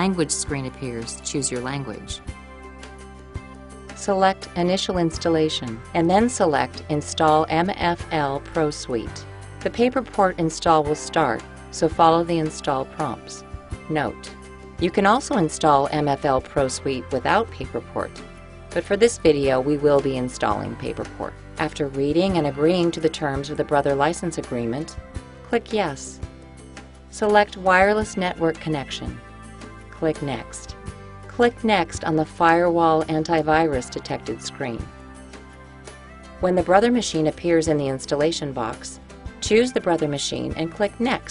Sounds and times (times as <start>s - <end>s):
Speech: 0.0s - 2.2s, 4.0s - 18.2s, 18.8s - 26.2s, 27.2s - 29.2s, 30.0s - 30.7s, 31.3s - 34.9s, 36.4s - 41.3s
Music: 0.0s - 41.3s.